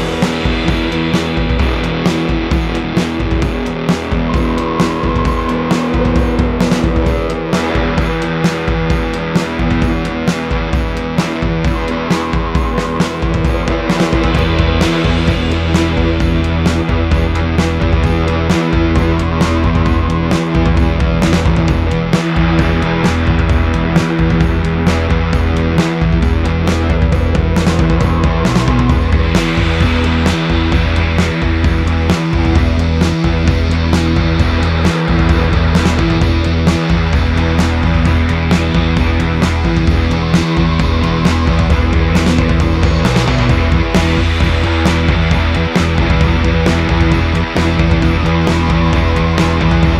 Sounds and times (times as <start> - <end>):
Music: 0.0 - 50.0.